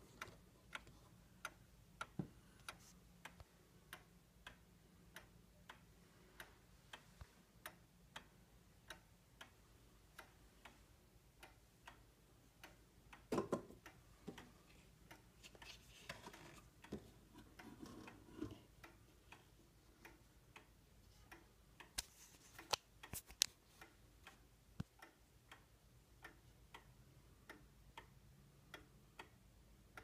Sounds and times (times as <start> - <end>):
Tick-tock: 0.0 - 30.0.